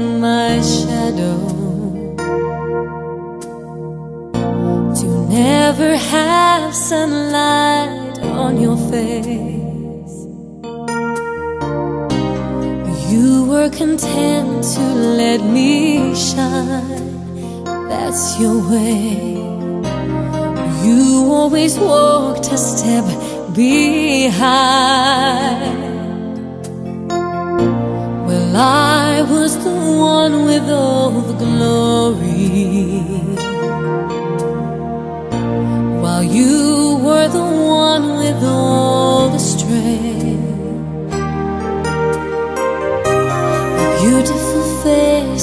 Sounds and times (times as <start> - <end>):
Music: 0.0 - 45.4.